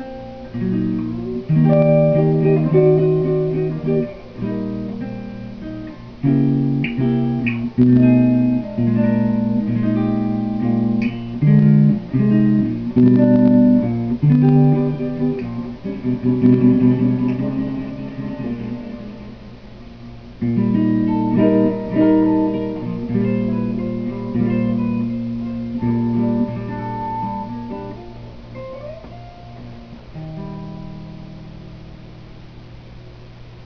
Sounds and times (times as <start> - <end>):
Guitar: 0.0 - 33.6
Inside, small room: 0.0 - 33.6.